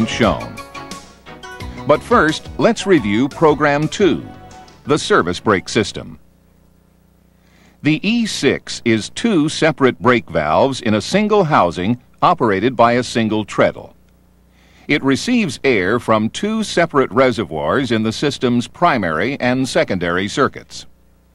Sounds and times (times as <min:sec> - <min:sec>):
Speech: 0:00.0 - 0:00.6, 0:01.9 - 0:04.3, 0:04.9 - 0:06.2, 0:07.8 - 0:14.0, 0:14.9 - 0:21.0.